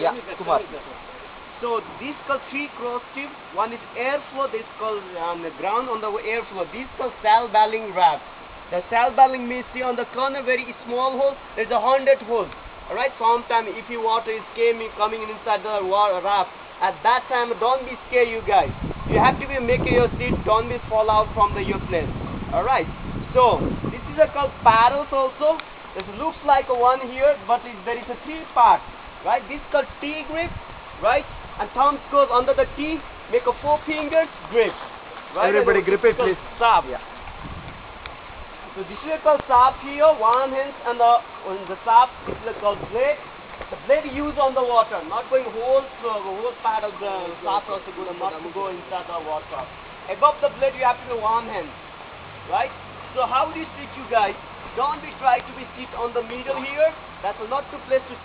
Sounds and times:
Speech: 0:00.0 - 0:01.0, 0:01.6 - 0:34.8, 0:35.4 - 0:37.1, 0:38.8 - 0:43.2, 0:43.8 - 0:51.8, 0:52.5 - 0:58.2
Stream: 0:00.0 - 0:58.2
Waterfall: 0:00.0 - 0:58.2.

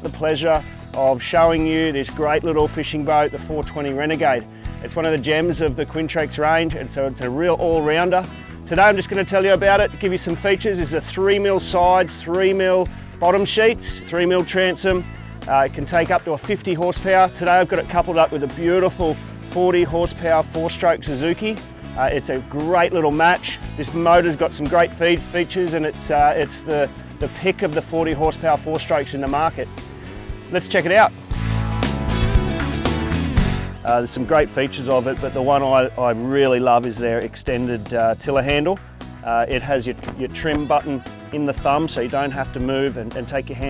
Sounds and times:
Speech: 0:00.0 - 0:29.7, 0:30.5 - 0:31.1, 0:33.8 - 0:43.7
Music: 0:00.0 - 0:43.7.

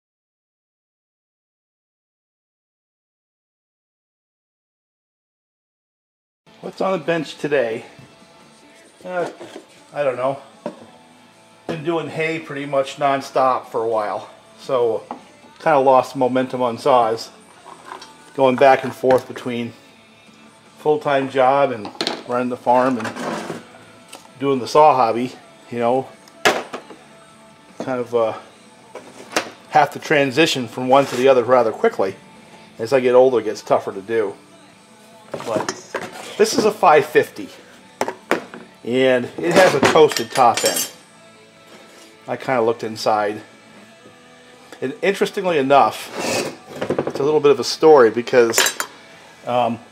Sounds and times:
Music: 0:06.5 - 0:49.9
Speech: 0:06.6 - 0:07.9, 0:09.0 - 0:10.4, 0:11.7 - 0:15.0, 0:15.6 - 0:17.3, 0:18.4 - 0:19.8, 0:20.8 - 0:23.2, 0:24.4 - 0:26.1, 0:27.8 - 0:28.4, 0:29.7 - 0:32.2, 0:32.8 - 0:34.4, 0:35.4 - 0:35.8, 0:36.4 - 0:37.6, 0:38.9 - 0:40.9, 0:42.3 - 0:43.4, 0:44.8 - 0:46.1, 0:47.2 - 0:48.7, 0:49.5 - 0:49.8.

